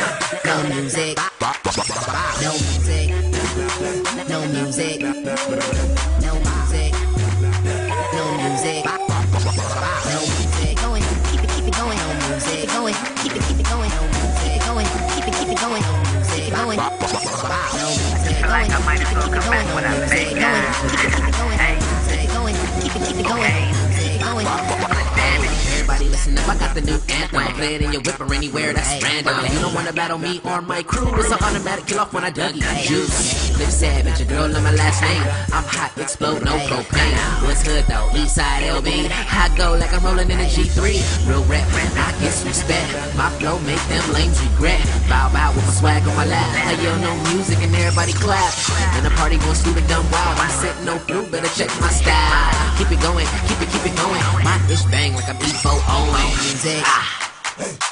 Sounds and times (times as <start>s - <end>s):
Soul music: 0.0s - 57.1s
Background music: 0.0s - 57.9s
Dance music: 0.0s - 57.9s
Independent music: 0.0s - 57.9s
Ska: 0.0s - 57.9s
Tender music: 2.8s - 28.2s
Soundtrack music: 5.4s - 28.4s.